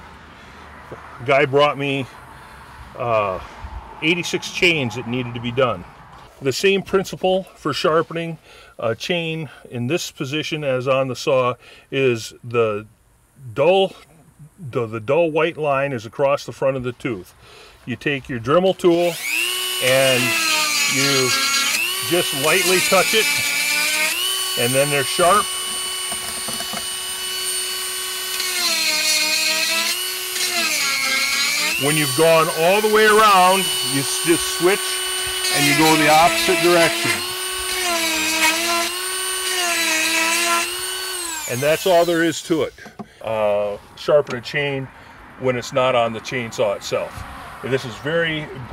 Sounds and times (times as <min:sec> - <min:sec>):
Speech: 0:01.2 - 0:02.1, 0:03.0 - 0:03.4, 0:04.0 - 0:05.8, 0:06.4 - 0:17.3, 0:17.9 - 0:19.2, 0:19.8 - 0:21.4, 0:22.0 - 0:23.4, 0:24.6 - 0:25.5, 0:31.8 - 0:34.9, 0:35.5 - 0:37.3, 0:41.5 - 0:48.7
Tools: 0:25.7 - 0:27.0.